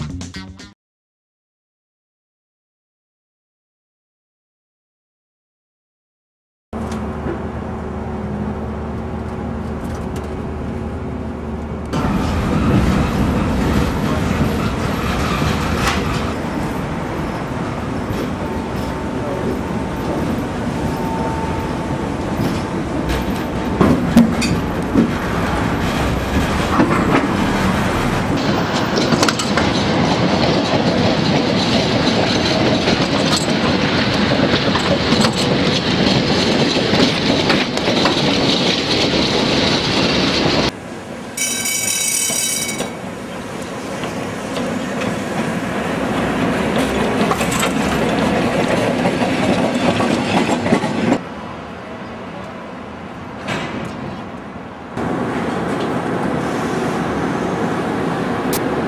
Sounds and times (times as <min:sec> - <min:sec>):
Outside, urban or manmade: 0:06.7 - 0:58.8
Railroad car, train wagon: 0:06.8 - 0:58.8.